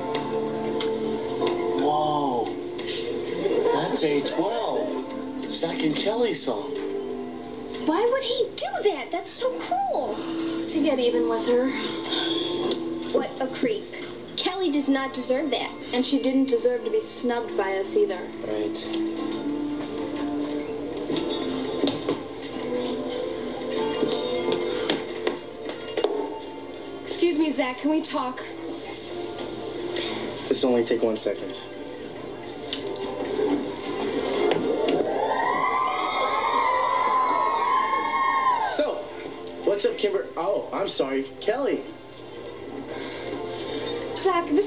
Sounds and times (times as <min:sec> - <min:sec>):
Music: 0:00.0 - 0:44.6.